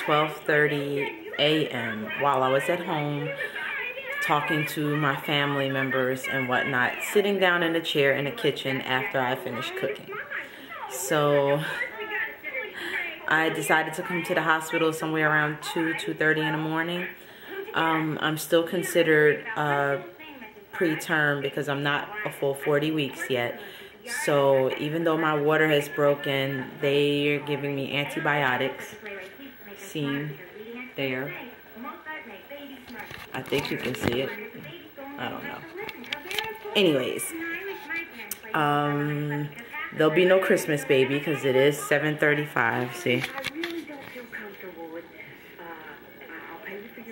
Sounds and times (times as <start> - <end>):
Speech: 0.0 - 47.1.